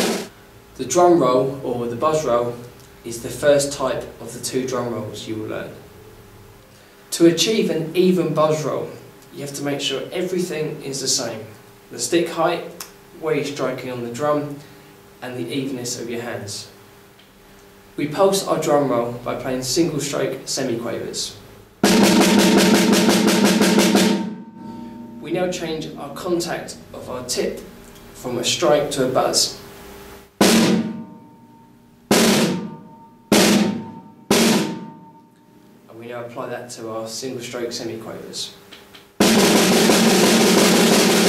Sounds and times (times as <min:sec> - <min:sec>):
Drum roll: 0:00.0 - 0:00.3, 0:21.8 - 0:27.6, 0:30.3 - 0:35.4, 0:39.2 - 0:41.2
Drum kit: 0:00.0 - 0:02.4, 0:21.8 - 0:28.7, 0:30.3 - 0:35.9, 0:39.0 - 0:41.2
Speech: 0:00.8 - 0:05.9, 0:07.1 - 0:16.8, 0:18.0 - 0:21.5, 0:25.2 - 0:29.6, 0:35.9 - 0:38.6.